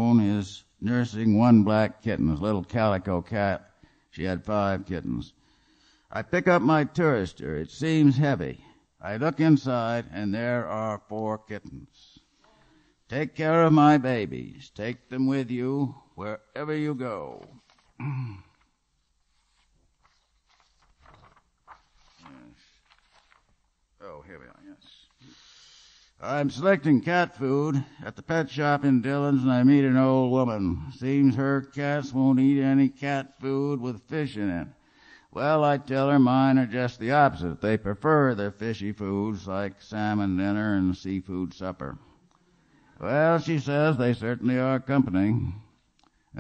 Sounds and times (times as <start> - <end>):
Speech: 0.0 - 5.4, 6.1 - 12.2, 13.1 - 17.6, 24.0 - 25.1, 26.2 - 34.8, 35.4 - 42.1, 43.0 - 45.7.